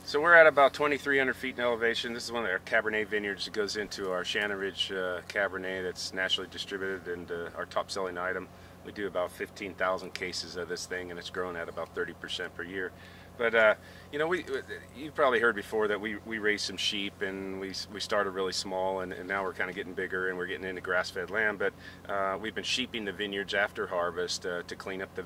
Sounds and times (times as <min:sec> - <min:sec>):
Speech: 0:00.1 - 0:25.2.